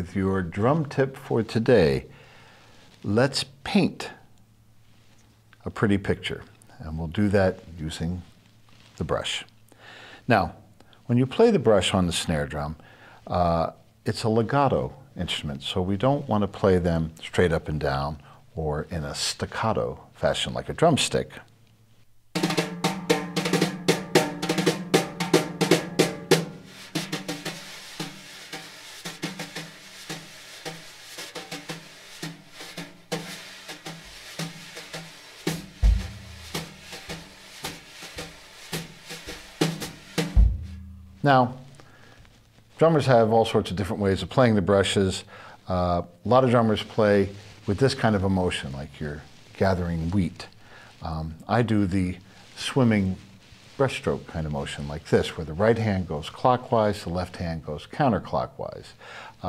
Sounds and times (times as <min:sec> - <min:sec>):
Speech: 0:00.0 - 0:02.1, 0:03.0 - 0:04.3, 0:05.6 - 0:08.3, 0:09.0 - 0:09.5, 0:10.3 - 0:21.5, 0:41.2 - 0:41.6, 0:42.8 - 0:59.4
Music: 0:22.4 - 0:41.2.